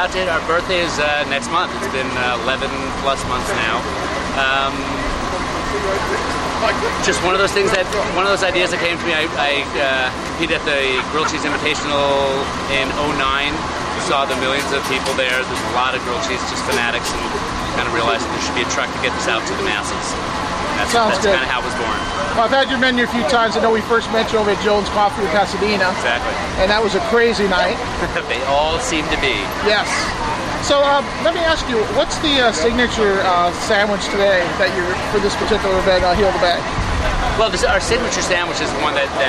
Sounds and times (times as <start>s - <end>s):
Speech: 0.0s - 20.2s.